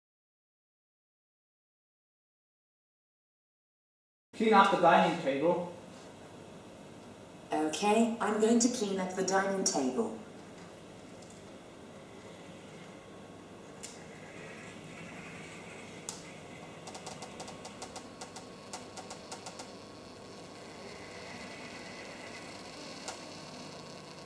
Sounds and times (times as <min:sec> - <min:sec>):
Speech: 0:04.4 - 0:05.8, 0:07.5 - 0:10.2.